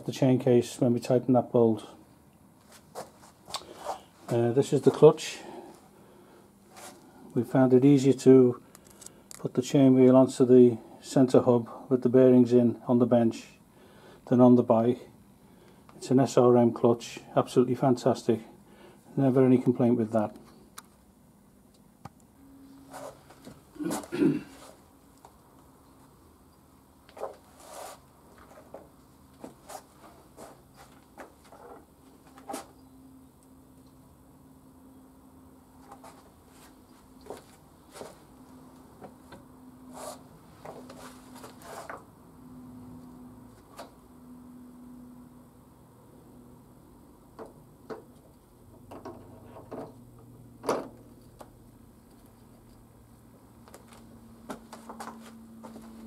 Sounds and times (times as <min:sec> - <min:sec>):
Speech: 0:00.0 - 0:02.0, 0:04.3 - 0:05.6, 0:07.3 - 0:08.6, 0:09.4 - 0:13.6, 0:14.3 - 0:15.2, 0:16.0 - 0:20.4.